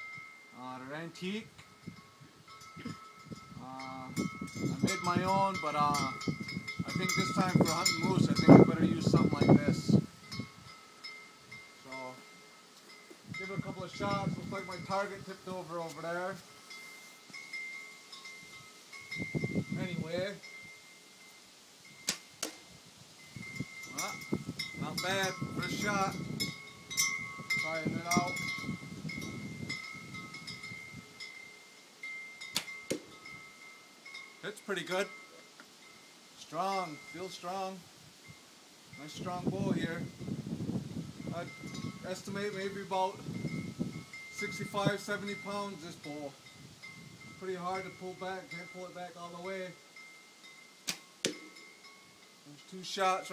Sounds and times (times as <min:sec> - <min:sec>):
Male speech, man speaking: 0:00.6 - 0:01.5, 0:03.6 - 0:04.2, 0:04.9 - 0:06.2, 0:06.9 - 0:10.0, 0:11.9 - 0:12.2, 0:13.4 - 0:16.4, 0:19.8 - 0:20.4, 0:24.0 - 0:24.2, 0:24.8 - 0:26.2, 0:27.6 - 0:28.4, 0:34.5 - 0:35.2, 0:36.4 - 0:37.8, 0:39.0 - 0:40.1, 0:41.3 - 0:43.2, 0:44.4 - 0:46.4, 0:47.4 - 0:49.8, 0:52.5 - 0:53.3.